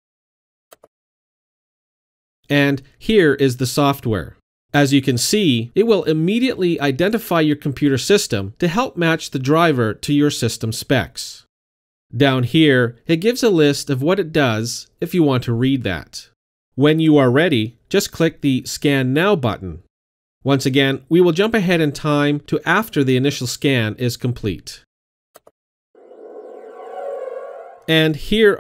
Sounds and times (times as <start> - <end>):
Speech: 2.5 - 11.5, 12.2 - 19.9, 20.5 - 24.9, 27.9 - 28.6.